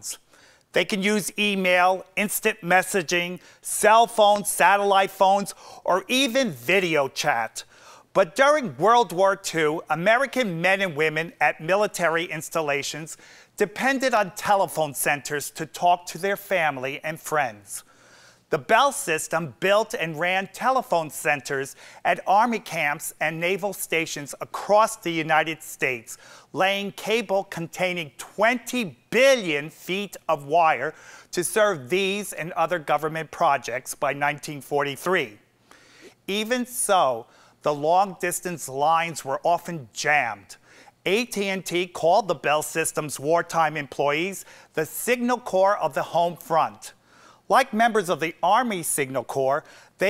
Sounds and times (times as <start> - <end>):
Speech: 0.0 - 0.2, 0.8 - 17.9, 18.5 - 35.4, 36.3 - 50.0.